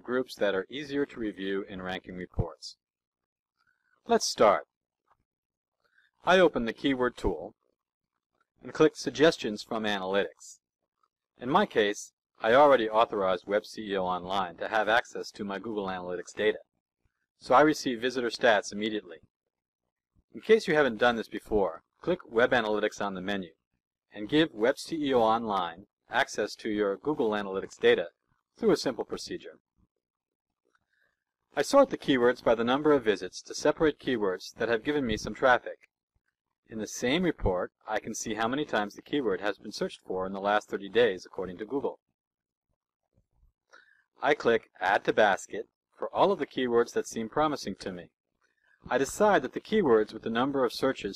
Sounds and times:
Speech: 0.0s - 2.8s, 4.1s - 4.7s, 6.3s - 7.6s, 8.6s - 10.6s, 11.4s - 16.7s, 17.4s - 19.2s, 20.4s - 23.6s, 24.2s - 29.6s, 31.6s - 35.8s, 36.7s - 42.0s, 44.2s - 48.1s, 48.9s - 51.1s.

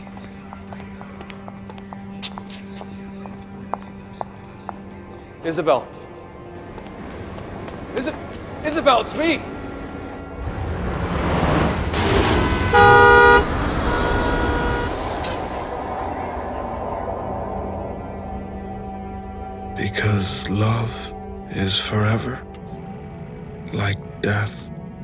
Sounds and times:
Music: 0.0s - 12.0s, 14.7s - 25.0s
Vehicle horn, car horn, honking: 12.2s - 15.4s.

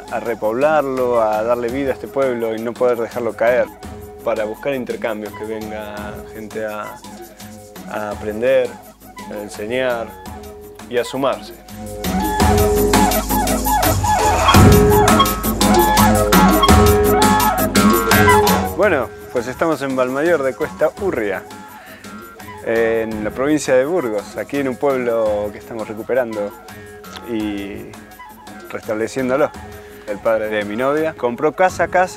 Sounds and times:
Speech: 0.0s - 7.0s, 7.9s - 10.2s, 10.9s - 11.6s, 18.1s - 21.5s, 22.7s - 26.6s, 27.2s - 28.0s, 28.7s - 32.1s
Maraca: 0.0s - 31.4s.

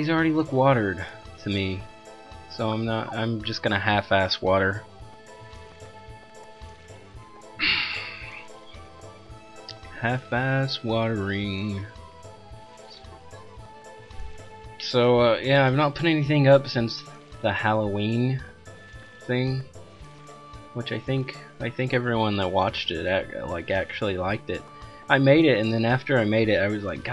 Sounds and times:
Speech: 0.0s - 1.9s, 2.5s - 4.8s, 10.0s - 11.9s, 14.8s - 18.5s, 19.3s - 19.7s, 20.8s - 27.1s
Music: 0.0s - 27.1s.

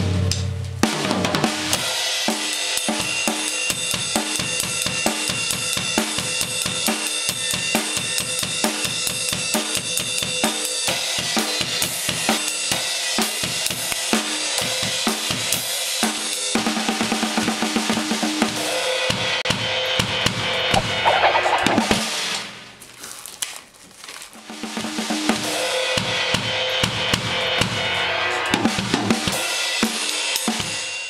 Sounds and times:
Music: 0.0s - 22.8s, 24.4s - 31.0s.

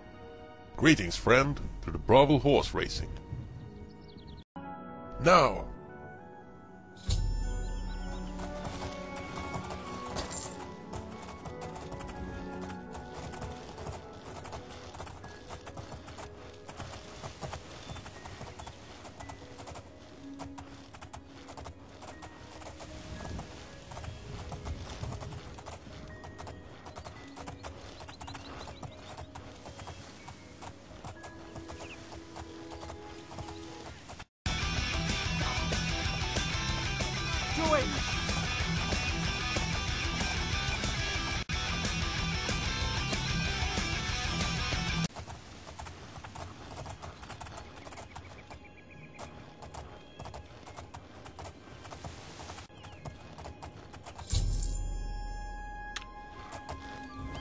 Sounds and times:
Music: 0.0s - 45.1s, 52.9s - 57.4s
Clip-clop: 8.0s - 34.3s, 42.1s - 55.2s, 55.8s - 57.4s.

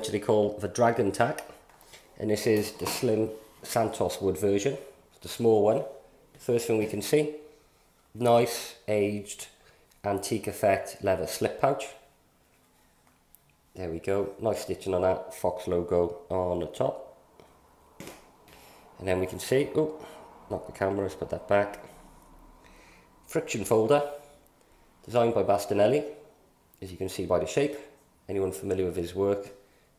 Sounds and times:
Speech: 0.0s - 1.5s, 2.2s - 7.4s, 8.2s - 12.1s, 13.8s - 17.2s, 19.0s - 21.9s, 23.3s - 24.2s, 25.1s - 26.2s, 26.8s - 29.6s.

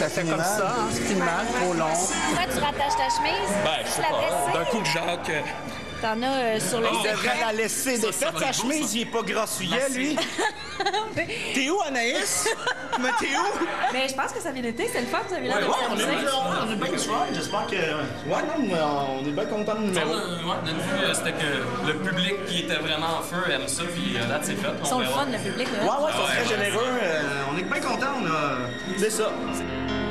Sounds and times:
Music: 0.0s - 30.1s.

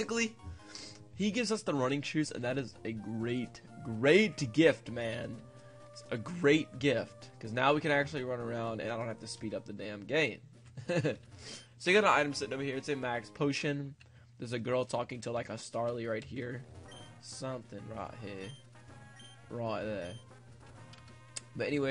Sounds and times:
Speech: 0.0s - 0.3s, 1.2s - 5.4s, 6.0s - 10.4s, 11.8s - 16.6s, 17.3s - 18.5s, 19.5s - 20.2s, 21.6s - 21.9s.

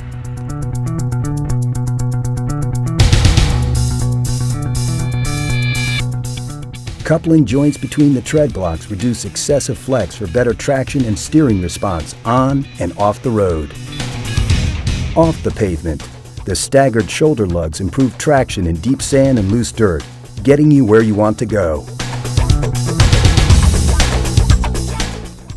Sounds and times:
Music: 0.0s - 25.5s
Speech: 7.0s - 13.7s, 15.2s - 21.9s.

